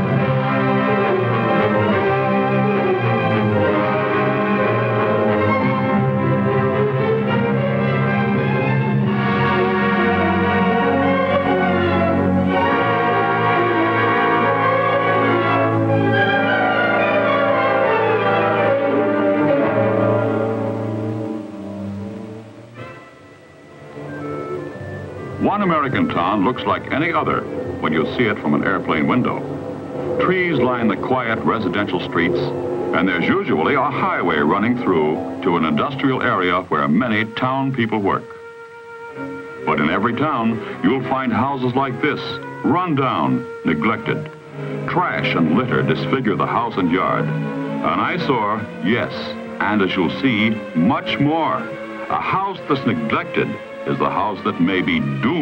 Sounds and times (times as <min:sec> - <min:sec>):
Music: 0:00.0 - 0:55.4.